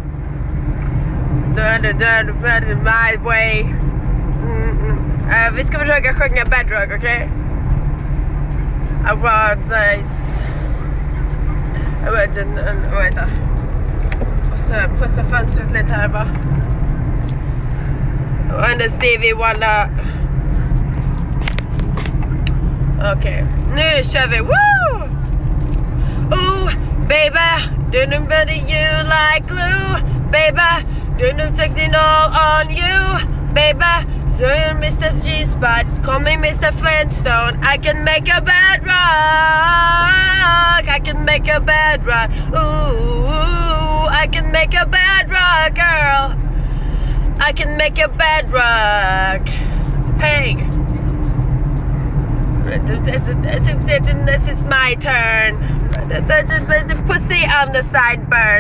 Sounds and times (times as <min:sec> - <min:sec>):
Vehicle: 0:00.0 - 0:58.6
Speech: 0:04.4 - 0:07.3, 0:12.0 - 0:13.4, 0:14.5 - 0:16.4, 0:18.5 - 0:20.0, 0:23.0 - 0:24.6, 0:50.2 - 0:50.7, 0:52.7 - 0:58.6.